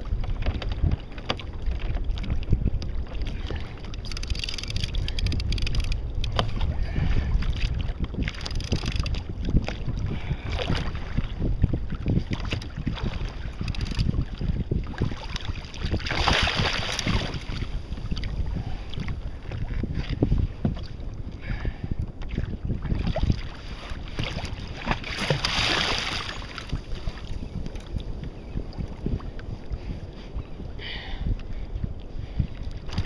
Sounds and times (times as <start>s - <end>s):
Rowboat, canoe, kayak: 0.0s - 33.0s.